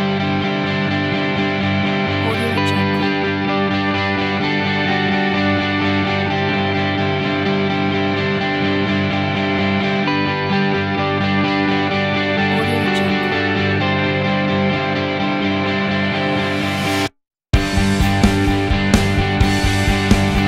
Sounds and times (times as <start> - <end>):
Soundtrack music: 2.2 - 3.2, 12.5 - 13.5
Speech: 2.2 - 3.2, 12.4 - 13.4.